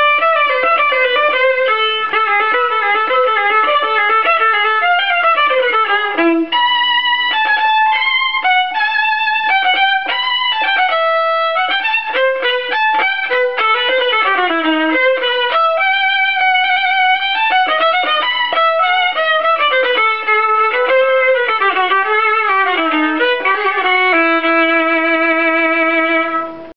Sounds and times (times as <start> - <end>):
Violin, fiddle: 0.0 - 26.7.